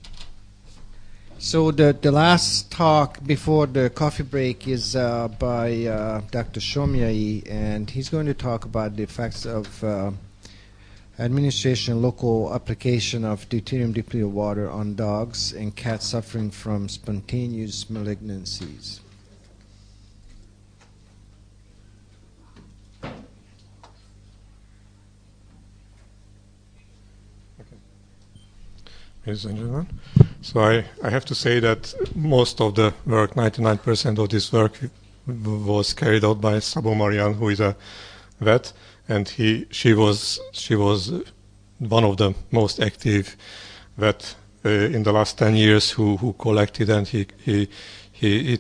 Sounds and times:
Speech: 1.4 - 10.3, 11.2 - 19.1, 29.2 - 37.8, 38.4 - 43.4, 44.0 - 48.6.

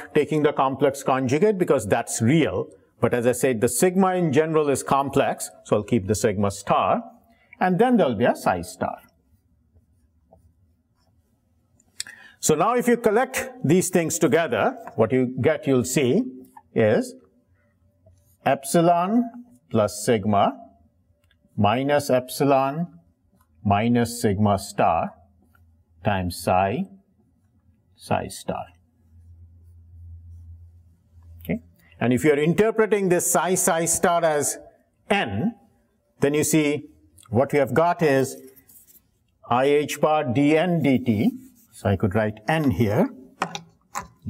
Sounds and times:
Speech: 0.0 - 9.2, 12.4 - 17.2, 18.4 - 20.7, 21.6 - 23.0, 23.6 - 25.2, 26.0 - 27.0, 28.0 - 28.8, 31.4 - 35.6, 36.2 - 38.5, 39.4 - 43.2
Inside, large room or hall: 0.0 - 44.2.

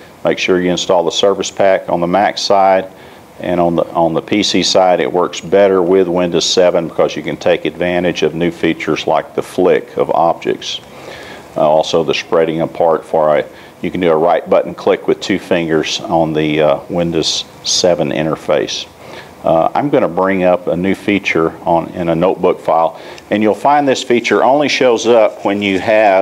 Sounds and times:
Speech: 0.2 - 10.8, 11.6 - 26.2.

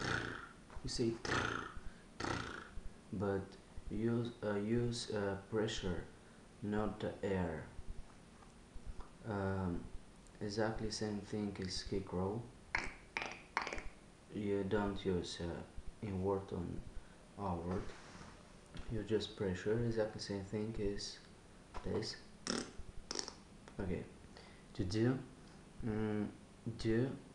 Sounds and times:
Speech: 0.8 - 1.7, 3.1 - 7.8, 9.2 - 12.5, 14.3 - 18.0, 18.8 - 22.3, 23.8 - 24.2, 24.8 - 27.3.

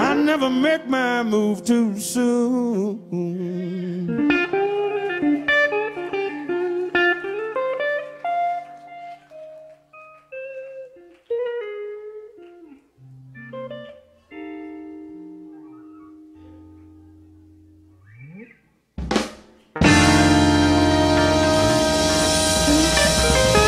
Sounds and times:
Drum kit: 19.0 - 23.6
Rimshot: 19.0 - 23.6.

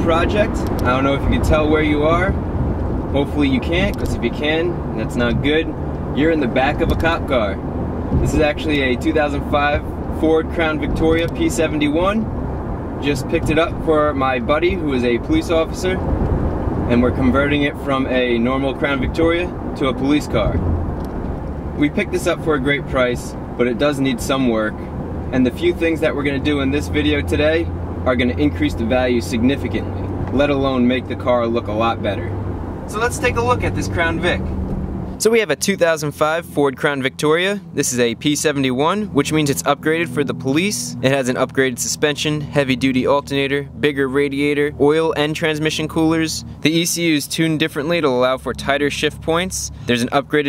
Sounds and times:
Speech: 0.0 - 2.4, 3.2 - 7.6, 8.2 - 12.3, 13.0 - 16.0, 16.9 - 20.6, 21.8 - 32.3, 32.9 - 34.4, 35.2 - 50.4.

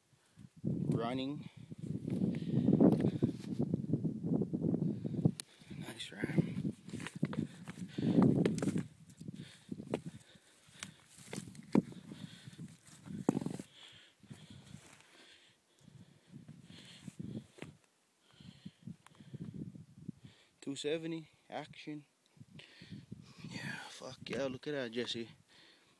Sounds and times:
Speech: 1.0 - 1.5, 5.8 - 6.6, 20.6 - 22.1, 23.5 - 25.4.

